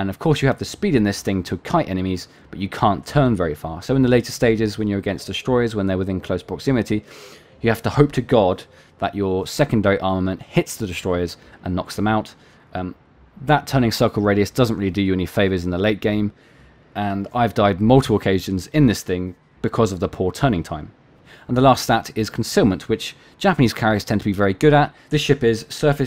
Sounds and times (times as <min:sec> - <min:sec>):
Speech: 0:00.0 - 0:16.4, 0:17.0 - 0:26.0.